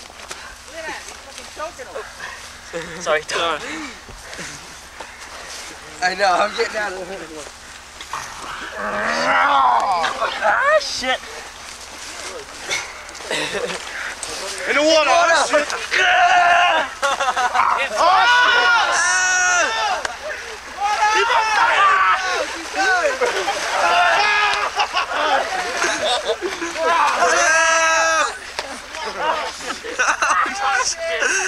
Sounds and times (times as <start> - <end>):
Stream: 12.6 - 31.4.